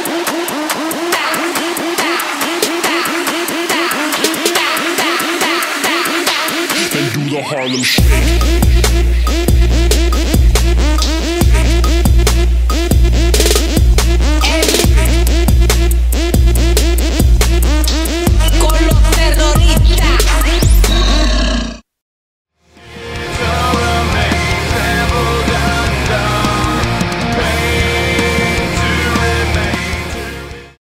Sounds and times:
Music: 0:00.0 - 0:21.2, 0:22.6 - 0:30.8.

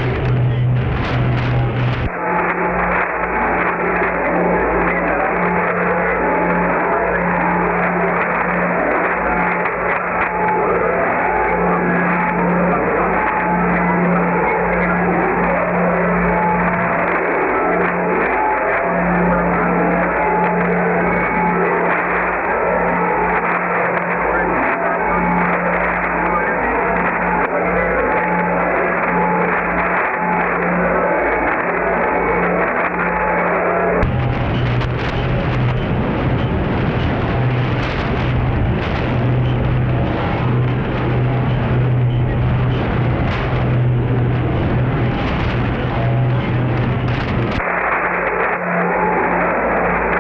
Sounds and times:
Cacophony: 0:00.0 - 0:50.2.

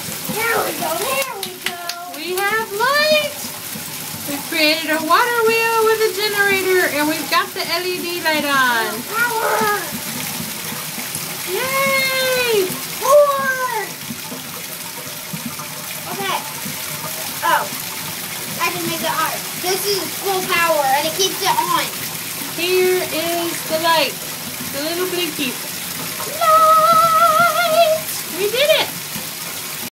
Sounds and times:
Stream: 0:00.0 - 0:29.9
Speech: 0:26.3 - 0:28.9.

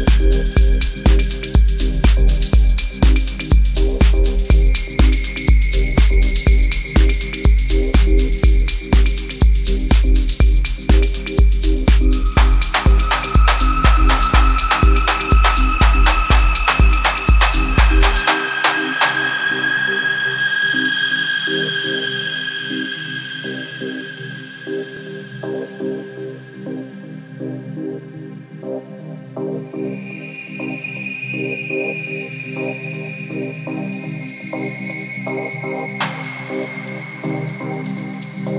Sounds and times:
Electronica: 0:00.0 - 0:38.5.

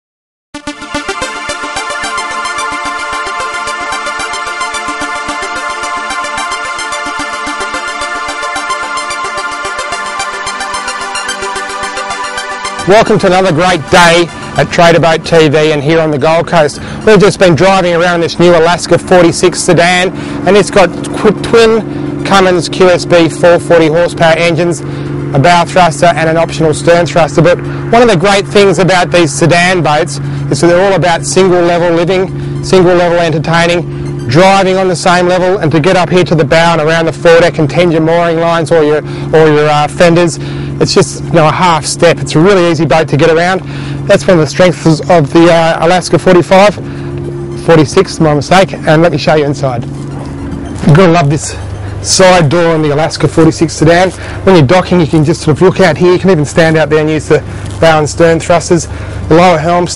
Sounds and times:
Music: 0:00.6 - 0:22.6, 0:30.9 - 0:36.0
Speech: 0:12.9 - 0:24.8, 0:25.4 - 0:46.8, 0:47.6 - 0:49.8, 0:50.8 - 0:59.9
Motorboat, speedboat: 0:12.9 - 0:59.9.

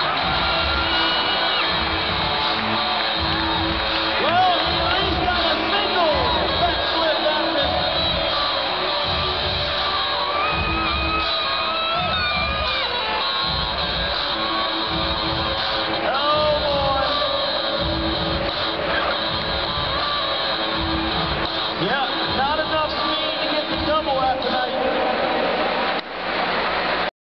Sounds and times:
Music: 0:00.0 - 0:27.1
Speech: 0:21.8 - 0:25.6.

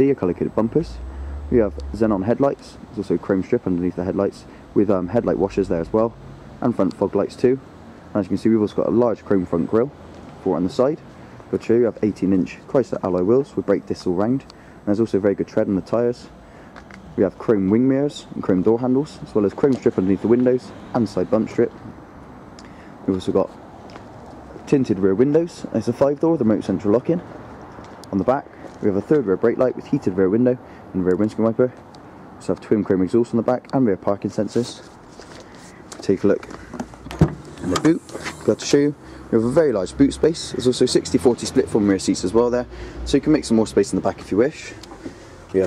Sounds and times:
Speech: 0:00.0 - 0:16.4, 0:17.2 - 0:21.9, 0:23.0 - 0:23.6, 0:24.6 - 0:27.3, 0:28.1 - 0:31.8, 0:32.4 - 0:34.9, 0:36.0 - 0:36.5, 0:37.6 - 0:44.8.

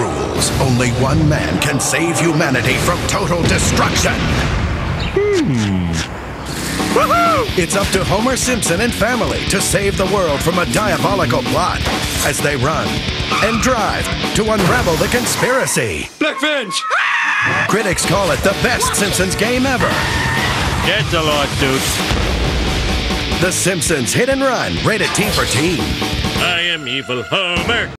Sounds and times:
Speech: 0:00.0 - 0:04.2, 0:07.5 - 0:16.9, 0:17.6 - 0:20.0, 0:20.8 - 0:22.0, 0:23.4 - 0:27.9
Music: 0:00.0 - 0:04.4, 0:06.6 - 0:16.2, 0:17.4 - 0:27.9.

